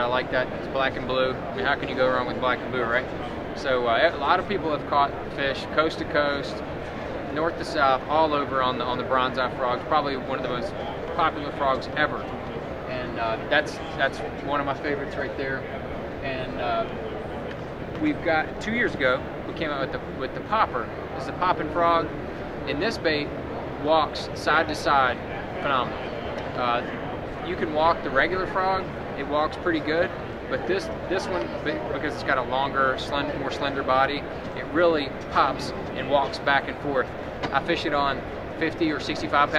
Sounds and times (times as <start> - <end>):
Speech: 0.0 - 6.6, 7.3 - 17.0, 18.0 - 22.1, 22.7 - 26.0, 26.6 - 39.5.